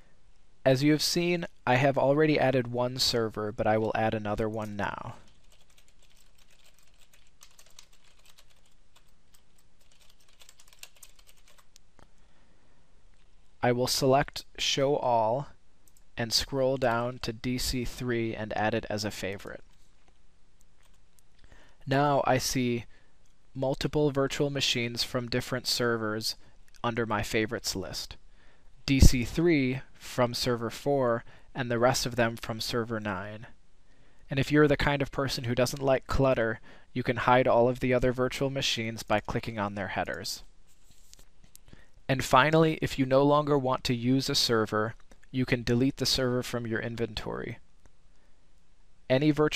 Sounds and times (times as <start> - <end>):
Typing: 4.6 - 11.7.